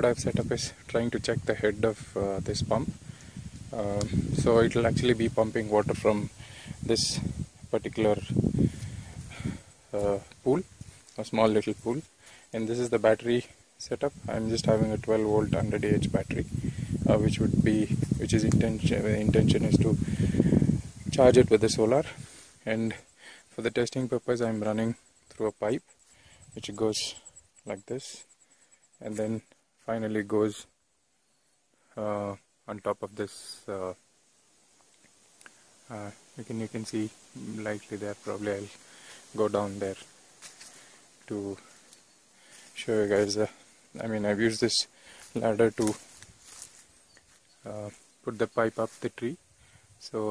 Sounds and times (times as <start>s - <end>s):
Speech: 0.0s - 3.0s, 3.7s - 8.4s, 9.3s - 20.0s, 21.1s - 25.8s, 26.6s - 28.3s, 29.0s - 30.7s, 32.0s - 34.0s, 35.9s - 40.1s, 41.2s - 41.7s, 42.8s - 46.1s, 47.6s - 49.4s, 50.0s - 50.3s.